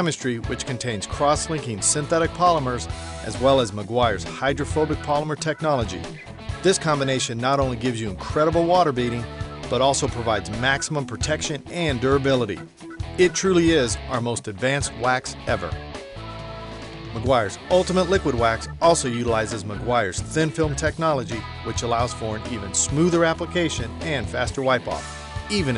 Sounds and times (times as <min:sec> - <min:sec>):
Speech: 0:00.0 - 0:12.6, 0:13.2 - 0:15.8, 0:17.2 - 0:25.7
Music: 0:00.0 - 0:25.7.